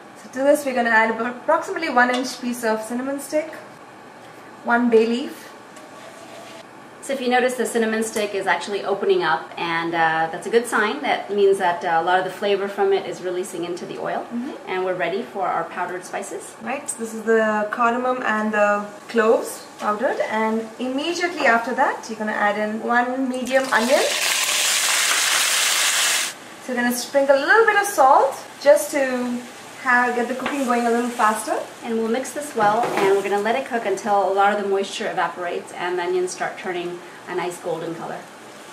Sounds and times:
Frying (food): 23.2s - 38.7s.

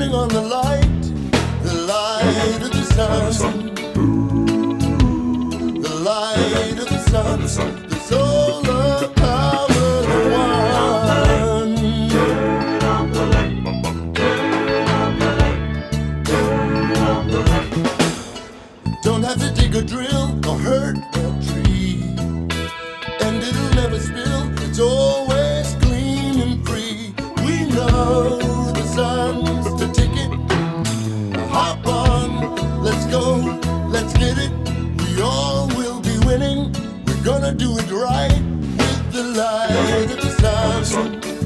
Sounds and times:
Rhythm and blues: 0.0s - 41.4s
Vocal music: 0.0s - 41.4s.

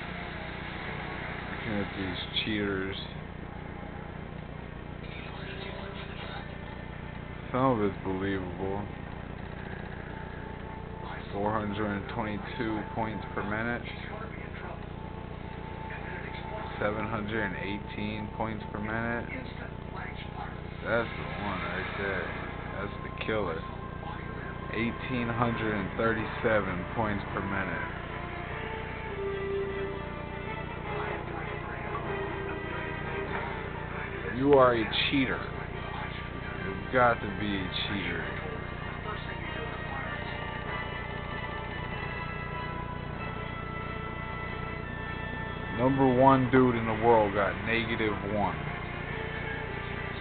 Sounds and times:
Music: 0.0s - 4.1s, 5.0s - 50.2s
Speech: 1.6s - 3.2s, 7.5s - 9.0s, 11.0s - 14.9s, 15.9s - 28.0s, 34.2s - 40.3s, 45.8s - 48.6s.

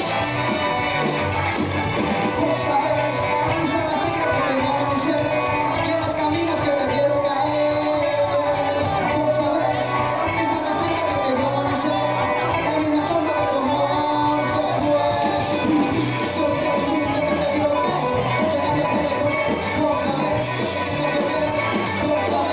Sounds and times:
Inside, large room or hall: 0.0s - 22.5s
Music: 0.0s - 22.5s.

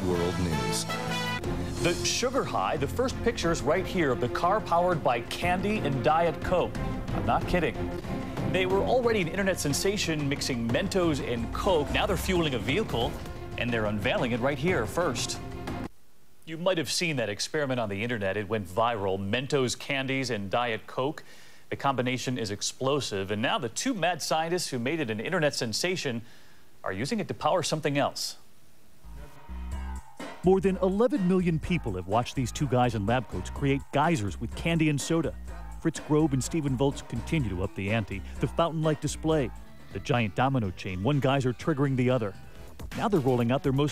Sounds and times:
Speech: 0.0s - 0.9s, 1.8s - 7.8s, 8.5s - 15.4s, 16.4s - 26.2s, 26.8s - 28.4s, 30.4s - 43.9s
Music: 0.0s - 15.9s, 29.0s - 43.9s.

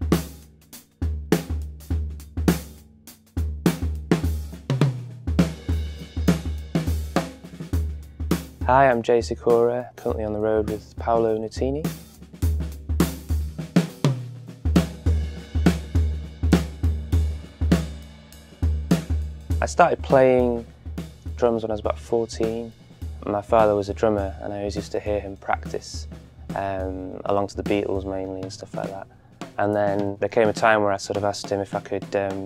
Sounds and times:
Music: 0.0s - 32.4s
Speech: 8.6s - 11.9s, 19.6s - 20.7s, 21.4s - 32.4s.

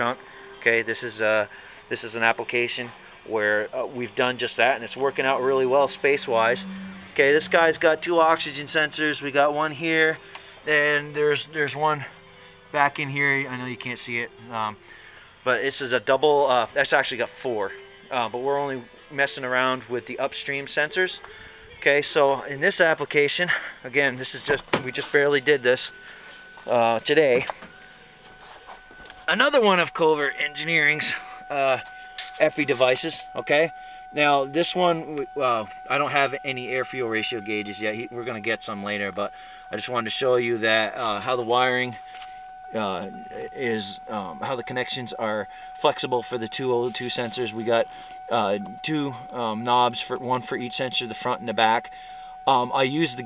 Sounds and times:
Speech: 0.0s - 12.1s, 12.8s - 14.8s, 15.5s - 21.2s, 21.8s - 26.0s, 26.7s - 27.5s, 29.3s - 31.8s, 32.4s - 42.0s, 42.8s - 51.9s, 52.5s - 53.2s
Music: 0.0s - 51.4s.

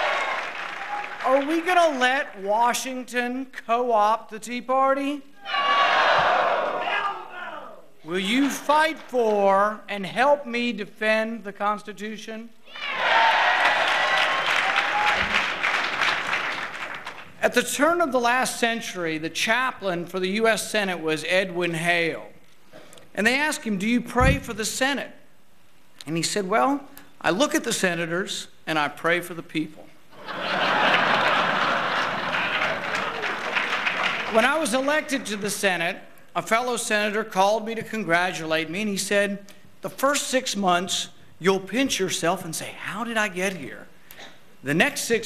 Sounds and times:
Narration, monologue: 1.1s - 5.4s, 6.9s - 12.7s, 17.1s - 30.1s, 34.1s - 45.2s
Male speech, man speaking: 1.2s - 5.2s, 6.9s - 12.5s, 17.4s - 22.3s, 23.2s - 25.2s, 26.0s - 29.9s, 34.3s - 43.9s, 44.6s - 45.2s.

